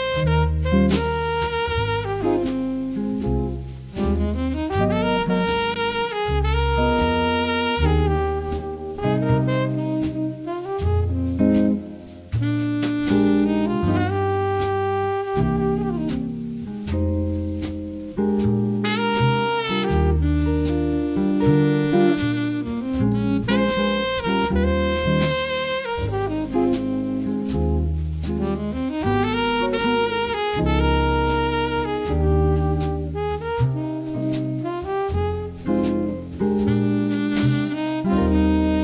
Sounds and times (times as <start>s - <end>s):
Music: 0.0s - 38.8s.